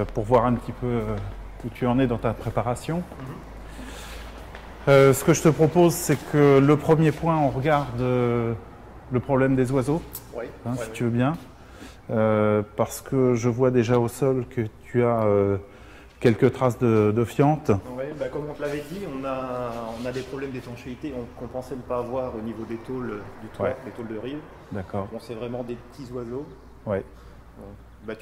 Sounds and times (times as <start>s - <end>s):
Speech: 0.0s - 3.5s, 4.9s - 11.5s, 12.1s - 28.2s.